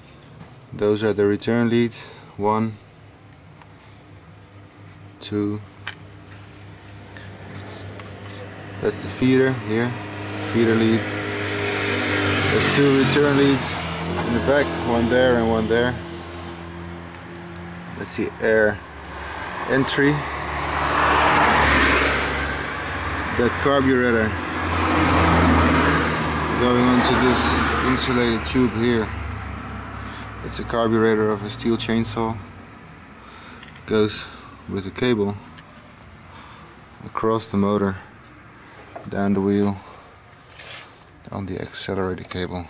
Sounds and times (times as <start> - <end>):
Medium engine (mid frequency): 0.0 - 42.7
Speech: 0.7 - 2.8, 5.2 - 5.7, 8.8 - 11.1, 12.5 - 16.0, 18.0 - 18.8, 19.7 - 20.2, 23.3 - 24.4, 26.6 - 29.2, 30.4 - 32.5, 33.9 - 35.5, 37.0 - 38.1, 39.1 - 39.8, 41.3 - 42.7.